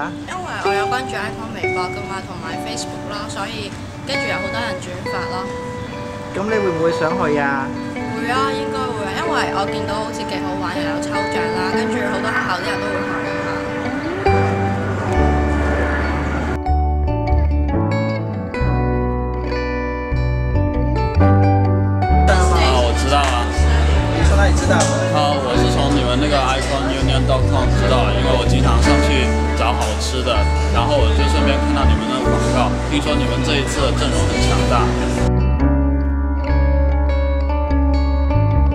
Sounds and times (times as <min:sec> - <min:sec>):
Speech: 0:00.0 - 0:05.5, 0:06.4 - 0:13.1, 0:22.3 - 0:35.3
Music: 0:00.0 - 0:38.7.